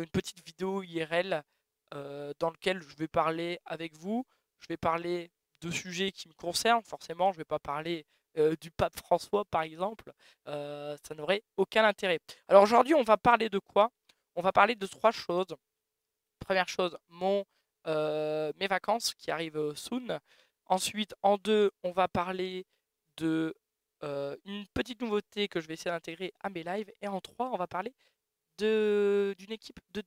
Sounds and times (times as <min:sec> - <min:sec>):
Speech: 0:00.0 - 0:15.6, 0:16.4 - 0:22.6, 0:23.2 - 0:27.9, 0:28.6 - 0:30.0.